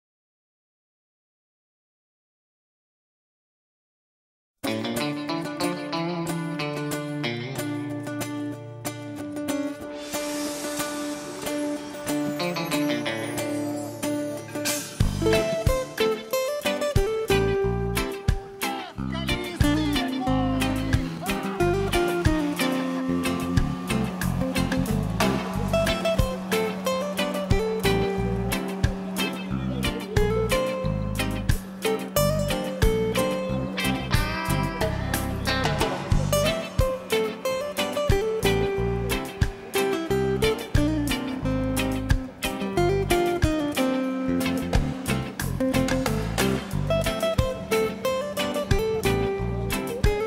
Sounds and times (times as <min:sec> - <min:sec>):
Music: 0:04.6 - 0:50.2
Speech: 0:18.6 - 0:21.8, 0:29.4 - 0:30.6.